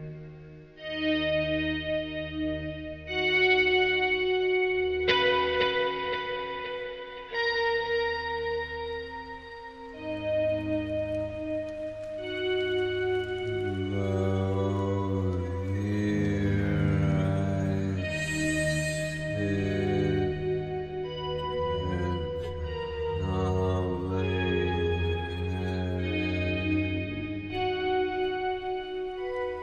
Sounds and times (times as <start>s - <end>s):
Effects unit: 0.0s - 29.6s
Music: 0.0s - 29.6s.